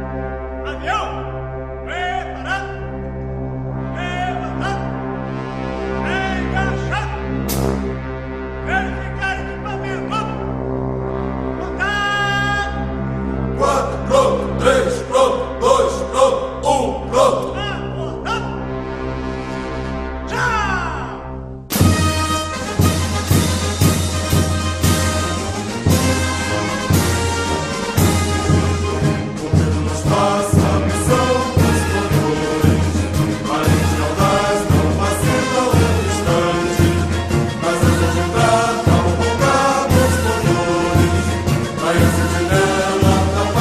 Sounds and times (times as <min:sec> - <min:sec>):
Music: 0:00.0 - 0:43.6.